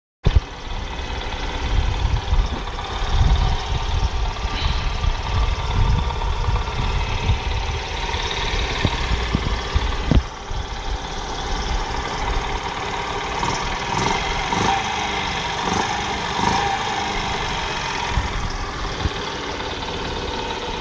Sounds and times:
Motorcycle: 0:00.2 - 0:20.8
Idling: 0:00.3 - 0:20.8.

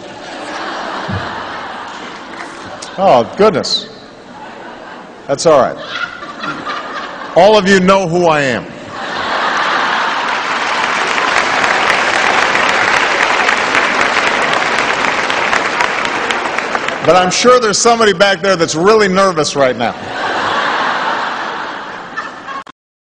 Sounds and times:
Narration, monologue: 0:02.7 - 0:04.3, 0:07.3 - 0:08.9, 0:17.0 - 0:20.1
Male speech, man speaking: 0:03.0 - 0:04.0, 0:05.3 - 0:05.8, 0:07.4 - 0:08.7, 0:17.1 - 0:20.0.

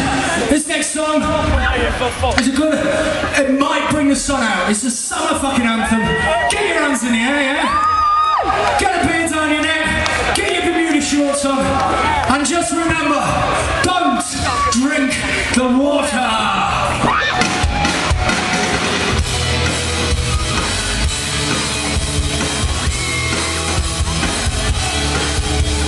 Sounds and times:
Music: 0:00.0 - 0:03.4, 0:09.2 - 0:25.8
Speech: 0:00.4 - 0:07.8, 0:08.8 - 0:16.9.

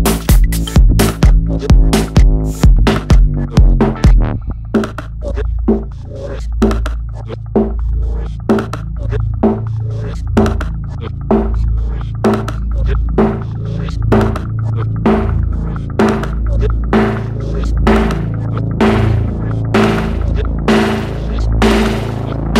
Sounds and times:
Electronic dance music: 0:00.0 - 0:22.5.

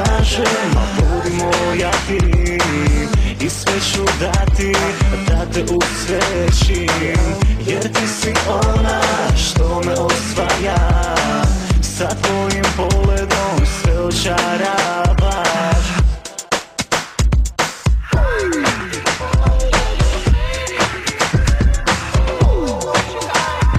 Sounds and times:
Rhythm and blues: 0:00.0 - 0:23.7.

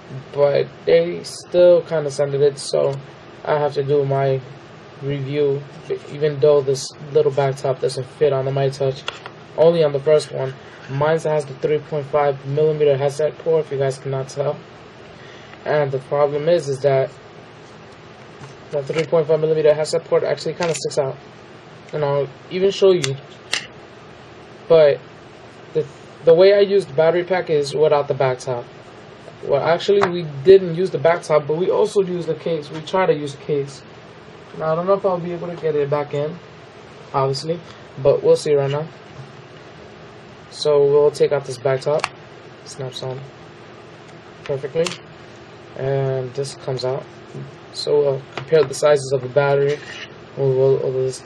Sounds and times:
Speech: 0:00.1 - 0:14.6, 0:15.6 - 0:17.2, 0:18.7 - 0:21.2, 0:21.9 - 0:23.4, 0:24.7 - 0:25.0, 0:25.8 - 0:28.7, 0:29.4 - 0:33.9, 0:34.5 - 0:36.4, 0:37.1 - 0:39.0, 0:40.5 - 0:43.3, 0:44.5 - 0:45.0, 0:45.8 - 0:51.2.

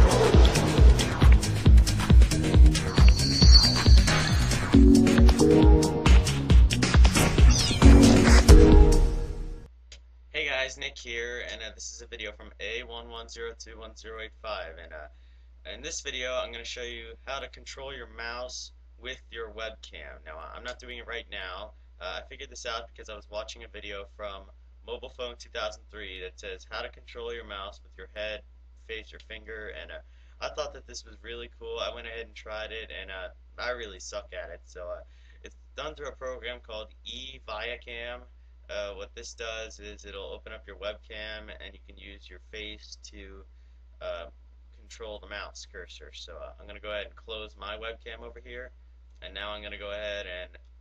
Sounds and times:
Speech: 0:10.3 - 0:50.6.

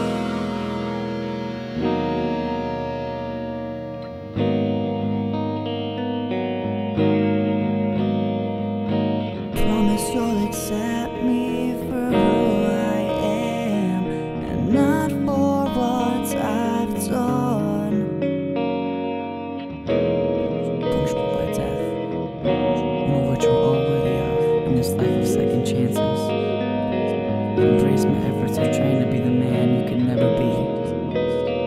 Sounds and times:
Music: 0:00.0 - 0:31.6.

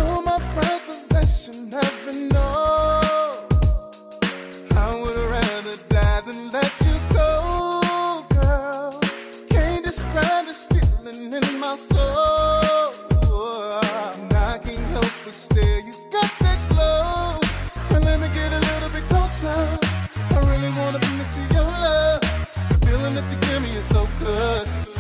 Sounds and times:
Rhythm and blues: 0:00.0 - 0:25.0.

